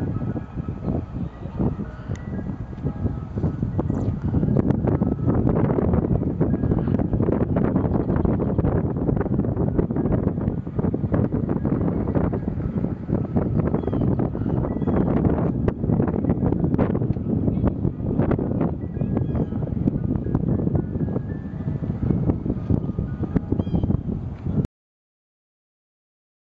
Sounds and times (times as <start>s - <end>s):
Music: 0.0s - 24.6s.